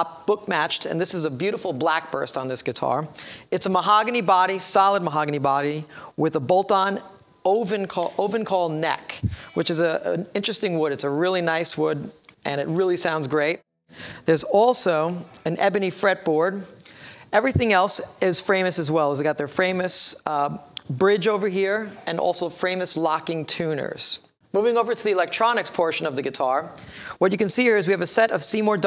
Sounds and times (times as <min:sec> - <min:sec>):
Speech: 0:00.0 - 0:13.6, 0:14.3 - 0:28.8.